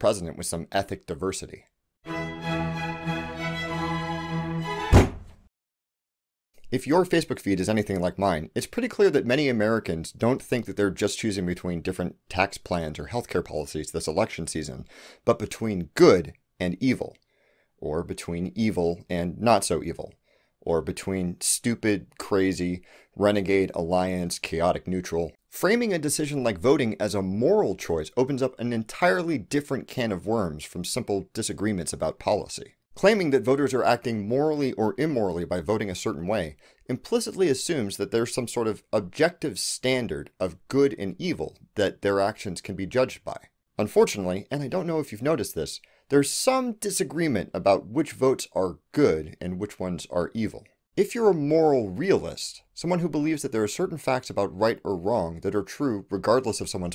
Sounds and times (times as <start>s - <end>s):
Speech: 0.0s - 1.7s, 6.6s - 17.2s, 17.8s - 56.9s
Music: 2.0s - 5.3s.